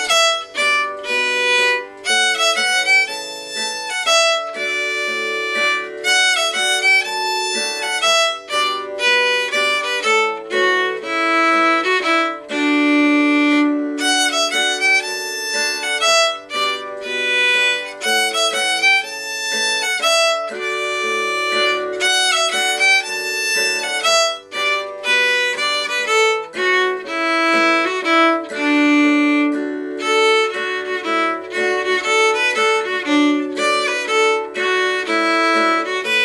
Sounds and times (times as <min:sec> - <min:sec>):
Violin, fiddle: 0:00.0 - 0:36.2.